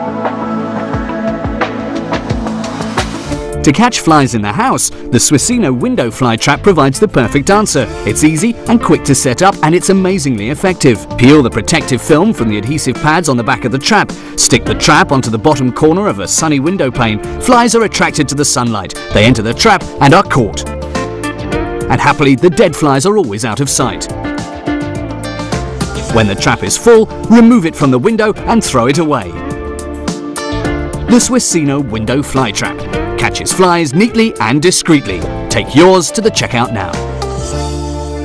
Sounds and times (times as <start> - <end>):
Music: 0.0 - 38.2
Speech: 3.6 - 20.7, 21.9 - 24.1, 26.1 - 29.4, 31.1 - 37.0.